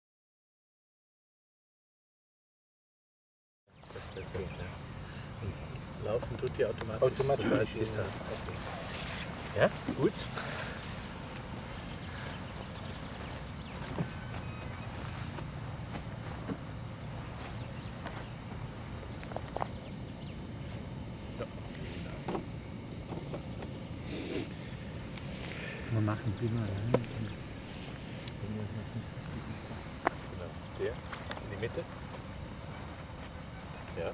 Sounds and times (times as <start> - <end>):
Speech: 4.0 - 4.8, 5.4 - 8.9, 25.9 - 27.4, 28.4 - 31.9.